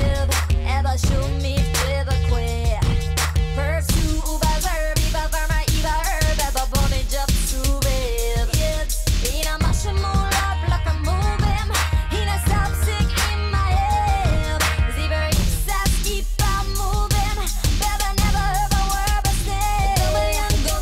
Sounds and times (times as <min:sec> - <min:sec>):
Pop music: 0:00.0 - 0:20.8.